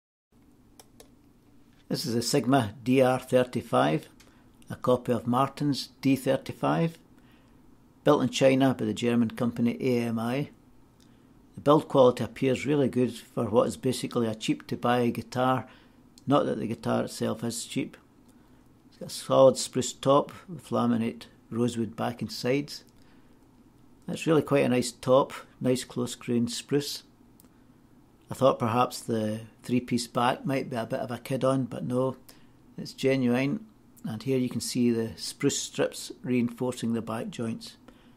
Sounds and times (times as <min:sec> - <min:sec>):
Inside, small room: 0:00.3 - 0:38.1
Speech: 0:01.8 - 0:07.0, 0:08.0 - 0:10.6, 0:11.6 - 0:18.1, 0:18.9 - 0:22.9, 0:24.0 - 0:27.1, 0:28.3 - 0:32.2, 0:32.8 - 0:37.9.